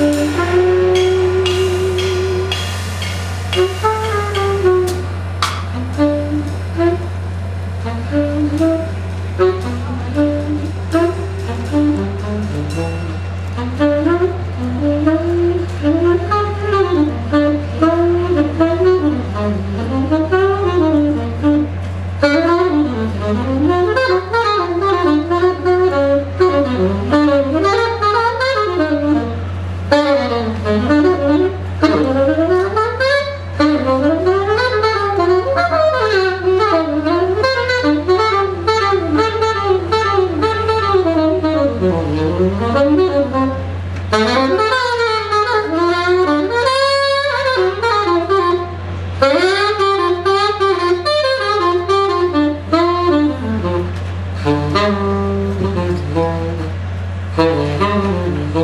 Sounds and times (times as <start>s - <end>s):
Inside, large room or hall: 0.0s - 58.6s
Music: 0.0s - 58.6s.